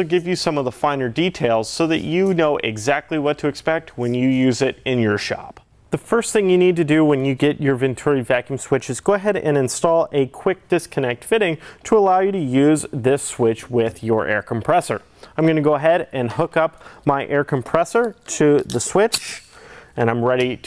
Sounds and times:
Speech: 0.0 - 20.6.

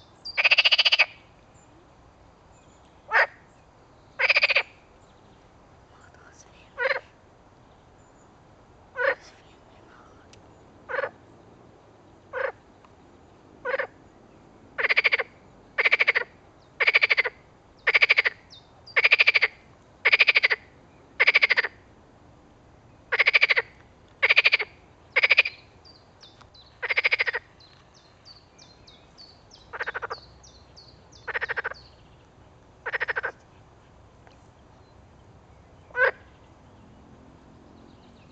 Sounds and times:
Frog: 0.3 - 1.2, 3.1 - 3.5, 4.2 - 4.8, 6.8 - 7.2, 9.0 - 9.4, 10.9 - 11.2, 12.3 - 12.6, 13.6 - 14.0, 14.8 - 21.8, 23.1 - 25.7, 26.8 - 27.6, 29.7 - 30.3, 31.2 - 31.8, 32.8 - 33.5, 35.9 - 36.4.

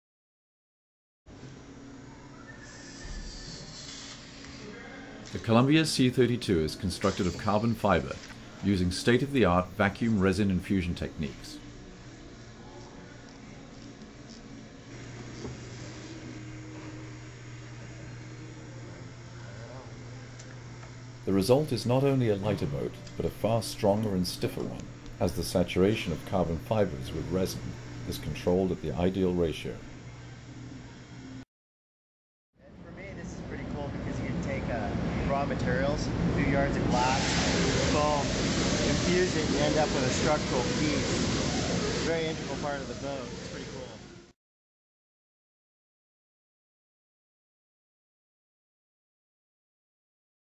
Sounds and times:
Speech: 4.7 - 11.6, 21.2 - 29.9, 32.7 - 41.2, 42.0 - 44.1.

